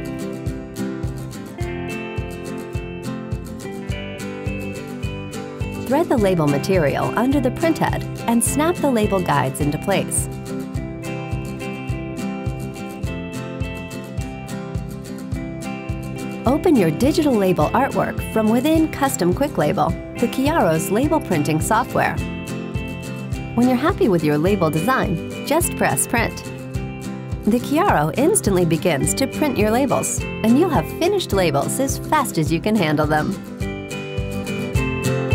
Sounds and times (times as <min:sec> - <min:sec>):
Music: 0:00.0 - 0:35.3
Speech: 0:05.9 - 0:10.3, 0:16.5 - 0:22.2, 0:23.6 - 0:26.4, 0:27.5 - 0:33.4.